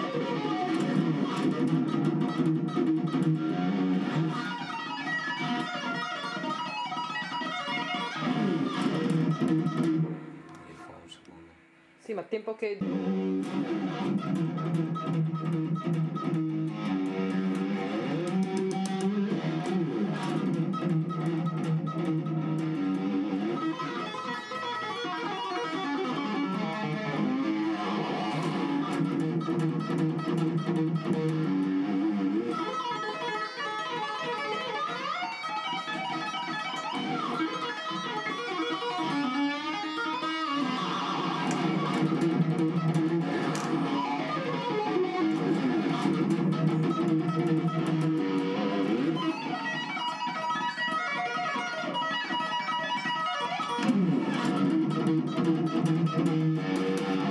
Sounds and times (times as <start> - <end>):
Tapping (guitar technique): 0.0 - 11.4, 12.8 - 57.3
Electric guitar: 0.0 - 12.0, 12.6 - 57.3.